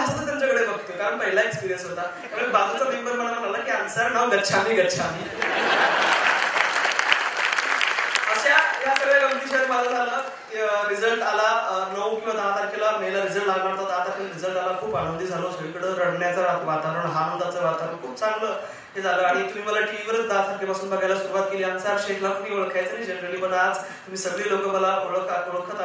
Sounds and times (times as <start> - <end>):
Male speech, man speaking: 0.0 - 5.3, 8.2 - 25.8
Narration, monologue: 0.0 - 5.6, 8.0 - 25.8.